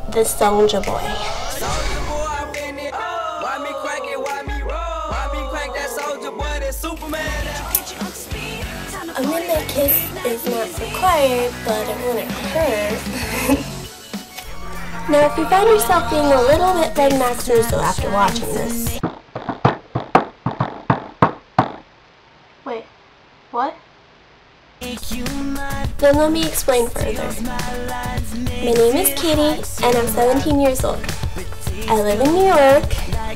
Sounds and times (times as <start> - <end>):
Speech: 0.0 - 1.2, 15.1 - 19.0, 26.0 - 27.4, 28.6 - 31.1, 31.9 - 33.1
Music: 0.0 - 19.0, 24.8 - 33.3.